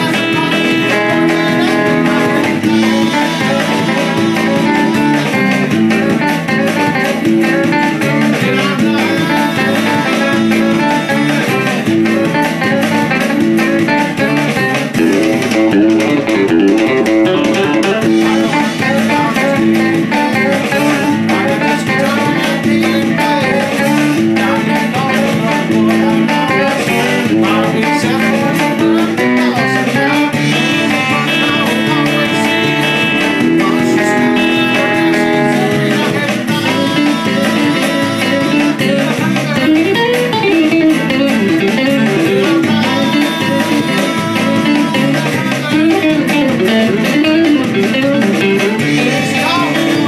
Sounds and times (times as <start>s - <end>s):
Strum: 0.0s - 28.2s
Electric guitar: 0.0s - 50.0s.